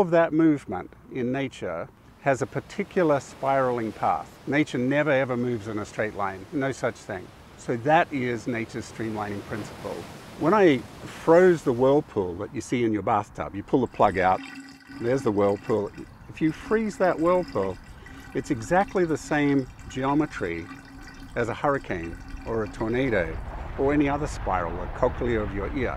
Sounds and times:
Speech: 0.0 - 14.4, 15.0 - 17.8, 18.4 - 20.7, 21.4 - 25.9
Stream: 1.4 - 25.9.

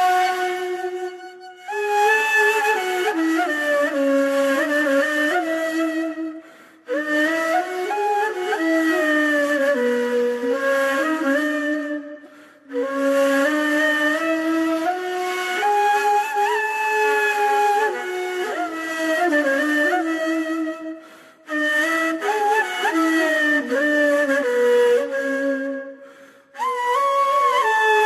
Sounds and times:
Music: 0.0 - 28.0.

